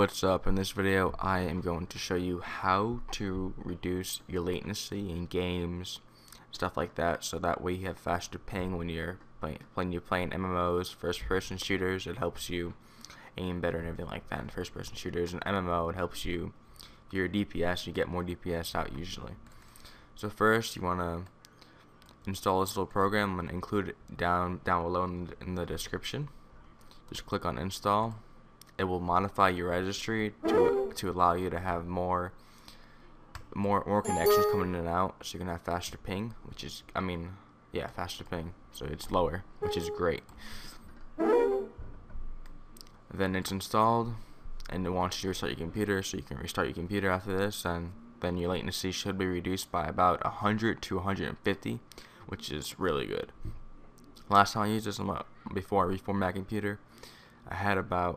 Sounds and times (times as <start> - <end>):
Speech: 0.0 - 19.4, 20.2 - 21.3, 22.2 - 26.4, 27.1 - 32.4, 33.4 - 40.3, 43.1 - 53.4, 54.2 - 56.8, 57.5 - 58.1
Ping: 34.1 - 34.8.